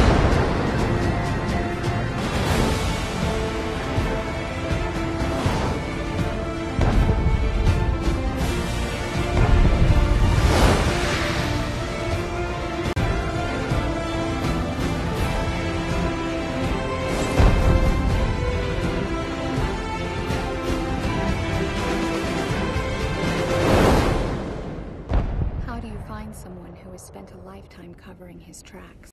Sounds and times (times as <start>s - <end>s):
Music: 0.0s - 29.1s.